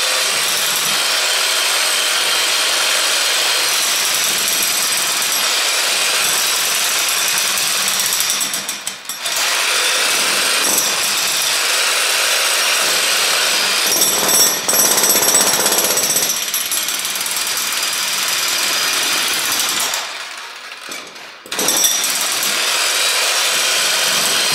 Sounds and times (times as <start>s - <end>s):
Power tool: 0.0s - 24.5s.